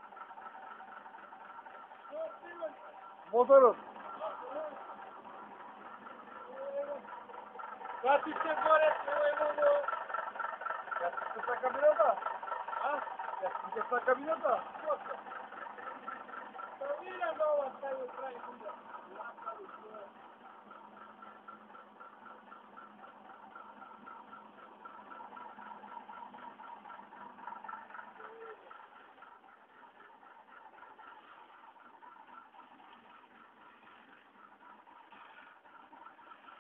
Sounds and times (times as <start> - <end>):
Truck: 0.0 - 36.6
Speech: 2.1 - 4.8, 6.4 - 7.1, 8.0 - 10.0, 11.0 - 12.2, 12.8 - 15.2, 16.8 - 20.2.